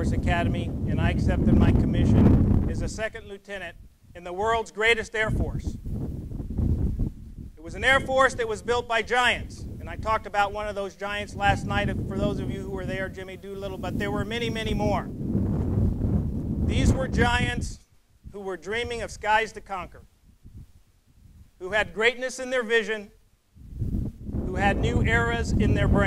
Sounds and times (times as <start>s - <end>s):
Male speech, man speaking: 0.0s - 5.8s, 7.6s - 15.1s, 16.7s - 17.8s, 18.4s - 20.0s, 21.6s - 23.2s, 24.5s - 26.0s.